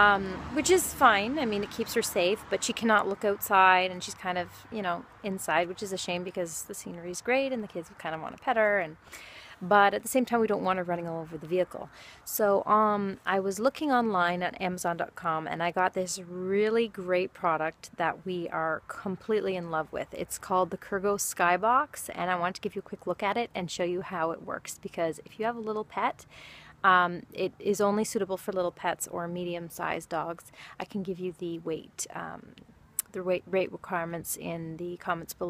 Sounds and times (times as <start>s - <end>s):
Speech: 0.0s - 9.0s, 9.6s - 26.2s, 26.8s - 35.4s.